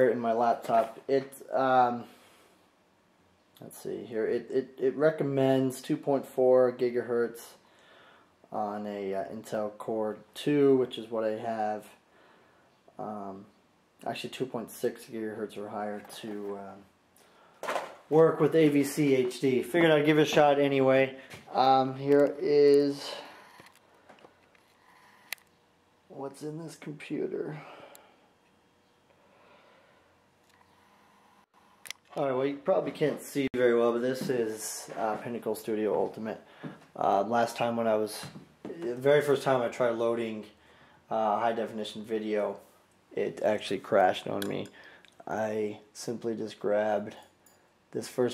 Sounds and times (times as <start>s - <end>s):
Speech: 0.0s - 2.1s, 3.6s - 7.6s, 8.5s - 12.0s, 13.0s - 16.9s, 18.1s - 23.3s, 26.1s - 27.7s, 32.1s - 36.4s, 37.0s - 47.3s, 47.9s - 48.3s
Inside, small room: 0.0s - 48.3s.